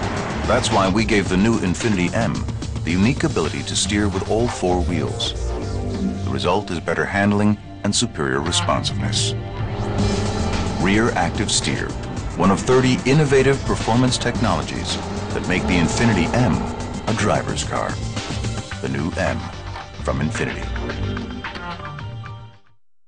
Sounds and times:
Car: 0.0 - 3.6, 8.8 - 18.8
Music: 0.0 - 22.8
Speech: 0.5 - 5.4, 6.2 - 9.4, 10.8 - 18.0, 18.8 - 20.8.

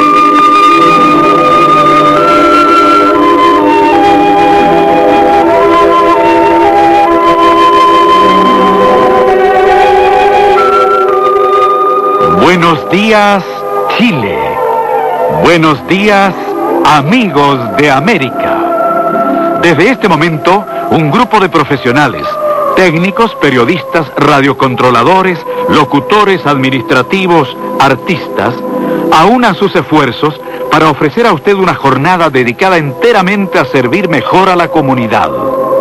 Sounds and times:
Music: 0.0 - 35.8
Speech: 12.2 - 14.6, 15.3 - 16.3, 16.9 - 18.5, 29.2 - 35.4.

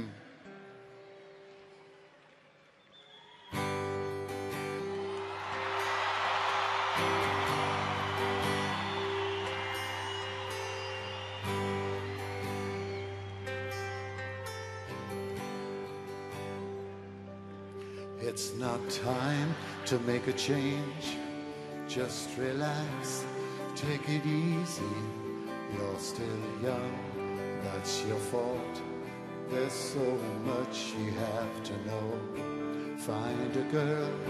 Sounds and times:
Music: 0.0 - 34.2.

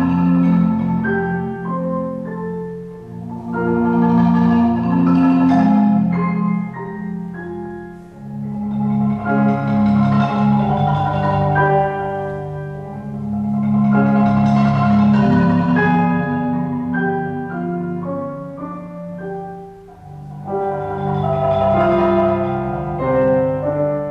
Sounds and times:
Classical music: 0.0 - 24.1
Marimba, xylophone: 0.0 - 24.1
Piano: 0.0 - 24.1.

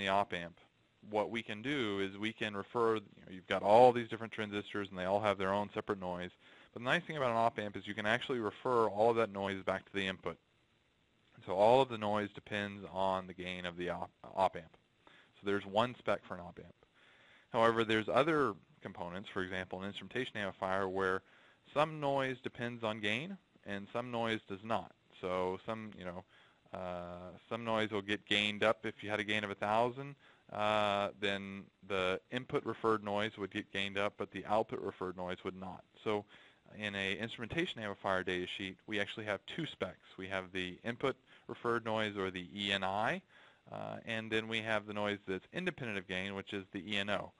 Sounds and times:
Speech: 0.0 - 10.4, 11.4 - 14.8, 15.4 - 16.8, 17.5 - 47.3.

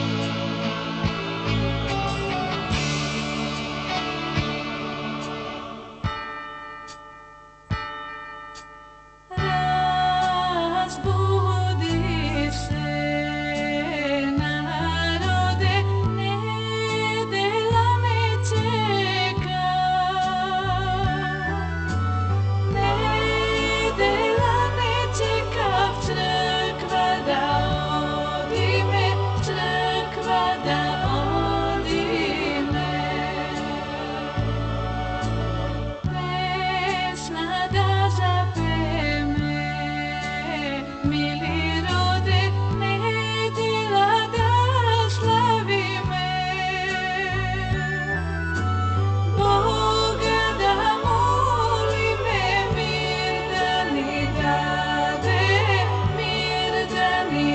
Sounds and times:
Music: 0.0 - 57.5.

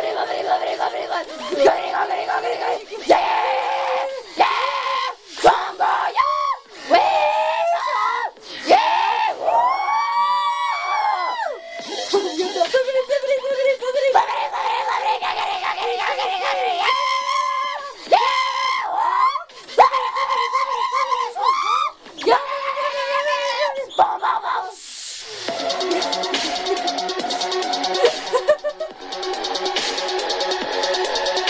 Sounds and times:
Female singing: 0.0 - 3.0, 11.9 - 14.3
Dubstep: 11.6 - 17.0, 22.0 - 31.5.

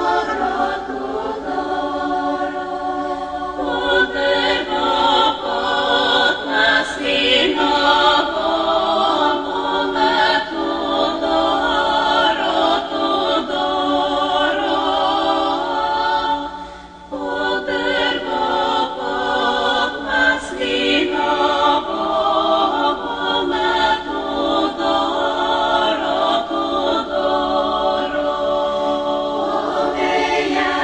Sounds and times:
Lullaby: 0.0 - 30.8.

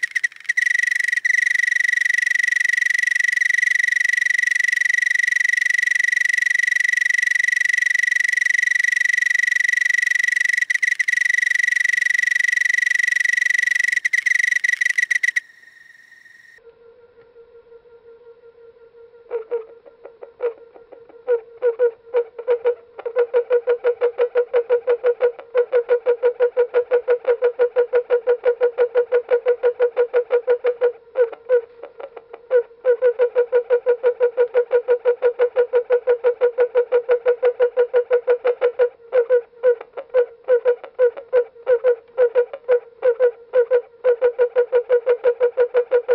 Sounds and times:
Cricket: 0.0 - 46.1.

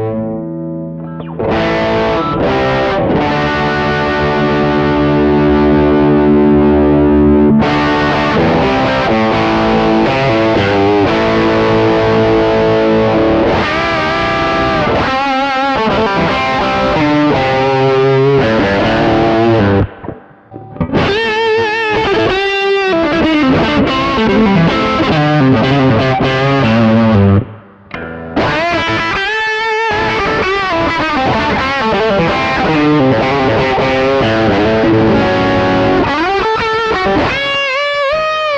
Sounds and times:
Distortion: 0.0 - 38.5
Effects unit: 0.0 - 38.5
Guitar: 0.0 - 38.5
Inside, small room: 0.0 - 38.5.

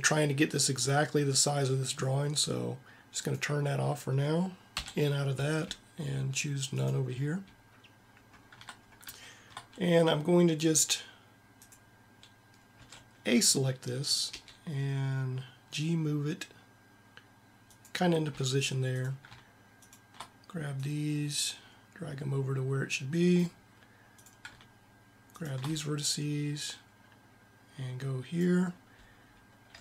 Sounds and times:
Computer keyboard: 8.2 - 9.8, 24.2 - 24.7, 25.3 - 25.8.

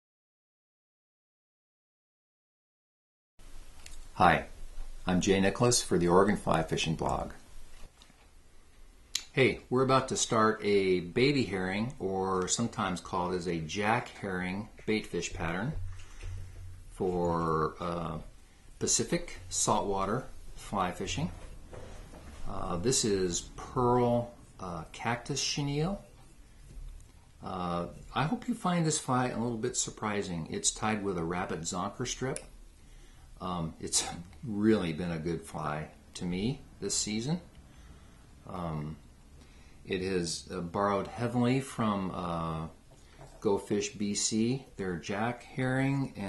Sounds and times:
Speech: 4.2 - 7.4, 9.2 - 15.8, 17.0 - 21.5, 22.4 - 26.1, 27.4 - 32.5, 33.4 - 37.5, 38.4 - 39.0, 39.9 - 42.8, 43.4 - 46.2.

